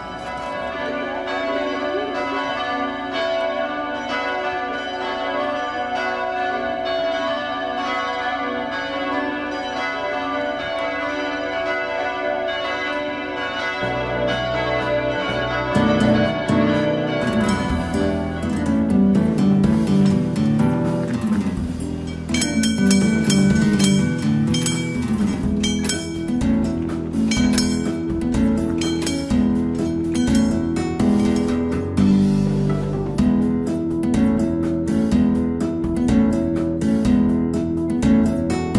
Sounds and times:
Change ringing (campanology): 0.0s - 32.2s.

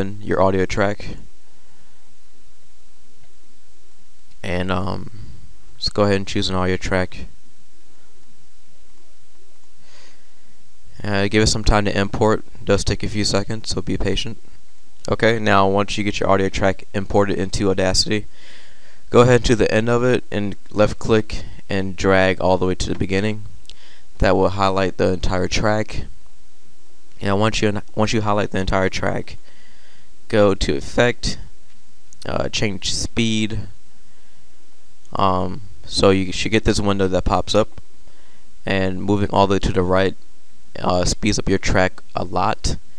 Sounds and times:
Speech: 0.0s - 1.3s, 4.4s - 5.2s, 5.8s - 7.4s, 11.0s - 14.4s, 15.0s - 18.3s, 19.1s - 23.5s, 24.2s - 26.2s, 27.2s - 29.4s, 30.3s - 31.5s, 32.2s - 33.8s, 35.1s - 37.8s, 38.6s - 40.2s, 40.8s - 42.8s.

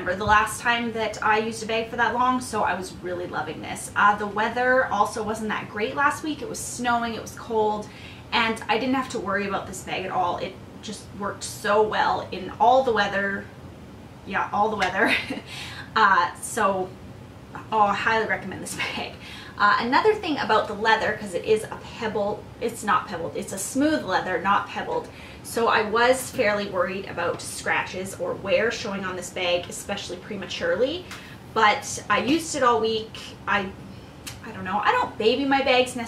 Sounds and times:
Speech: 0.0s - 13.5s, 14.3s - 17.0s, 17.6s - 36.0s
Inside, small room: 0.0s - 36.0s.

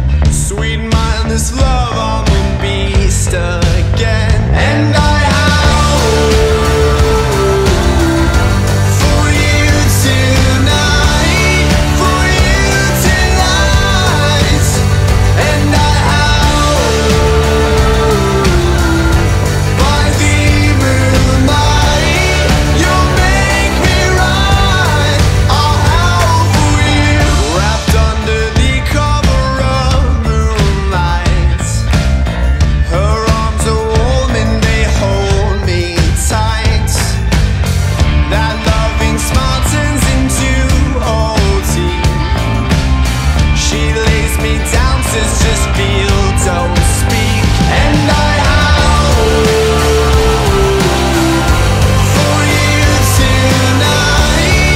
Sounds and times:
Music: 0.0s - 54.7s.

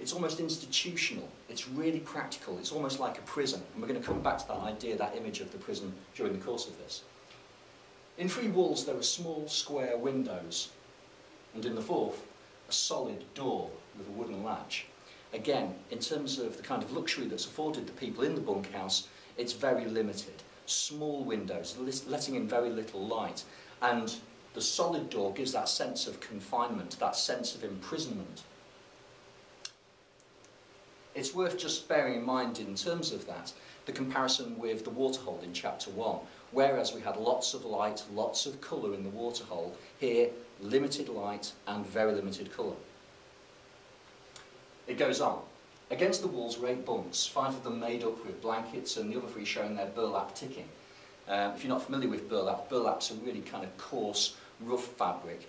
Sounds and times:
Speech: 0.0s - 7.1s, 8.2s - 10.8s, 11.5s - 28.5s, 31.1s - 42.9s, 44.9s - 55.4s.

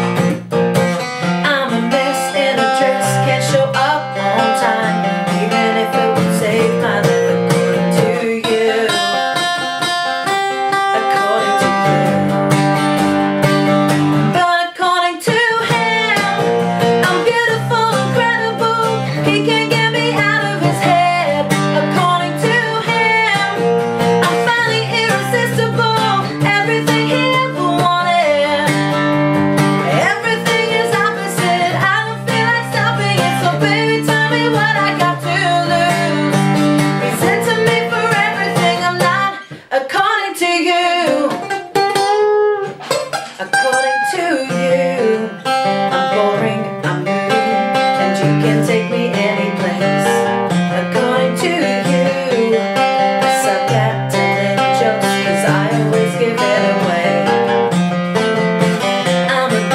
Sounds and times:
Tapping (guitar technique): 0.0s - 14.5s, 15.2s - 39.7s, 40.9s - 59.7s.

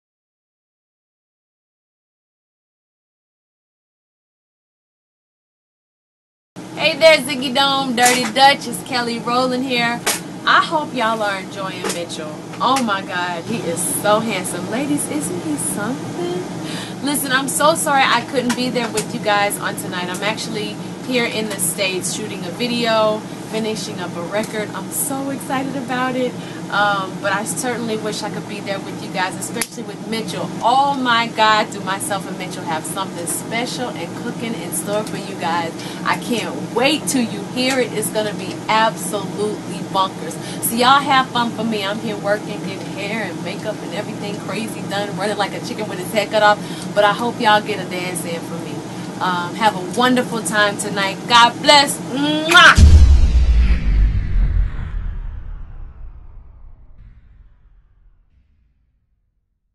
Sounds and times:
Speech: 6.8s - 52.9s.

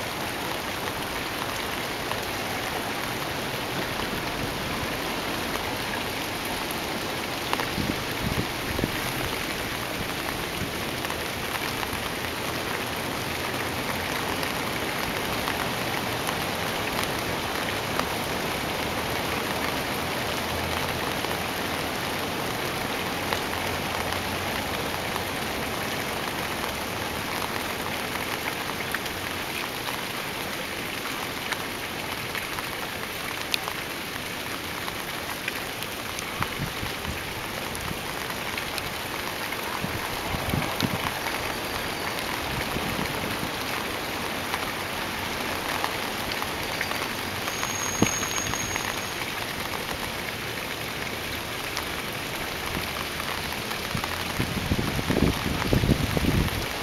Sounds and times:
Rain on surface: 0.0s - 56.8s.

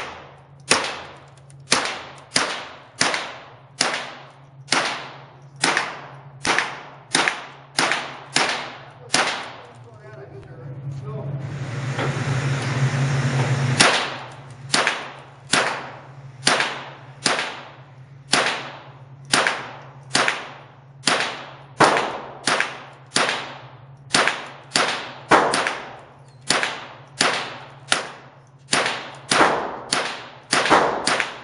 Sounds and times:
Speech: 9.0s - 11.4s.

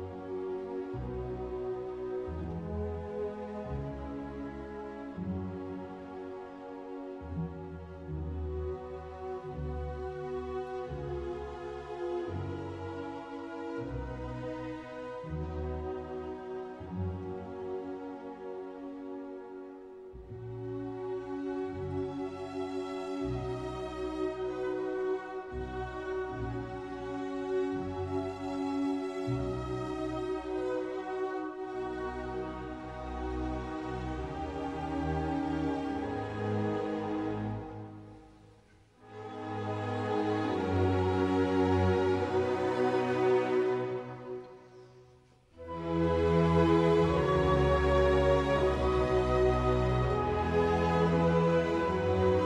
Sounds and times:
Classical music: 0.0s - 52.4s.

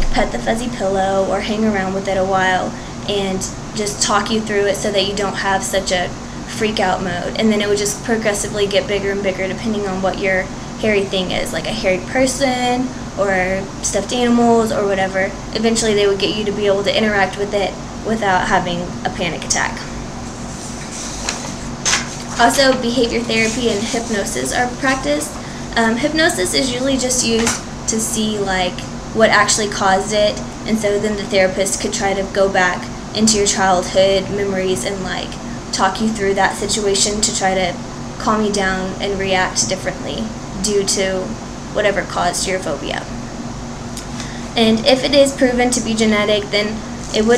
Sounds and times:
Speech: 0.0s - 19.9s, 22.4s - 43.1s, 44.6s - 47.3s.

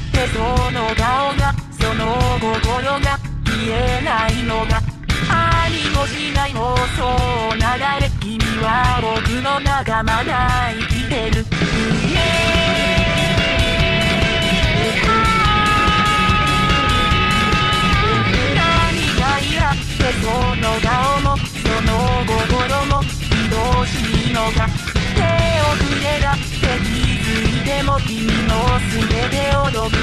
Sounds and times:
Music: 0.0s - 30.0s.

